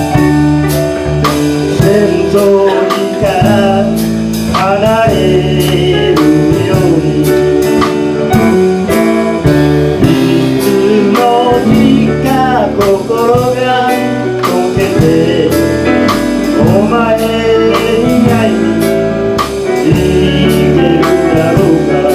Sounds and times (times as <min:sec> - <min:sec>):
Blues: 0:00.0 - 0:22.1.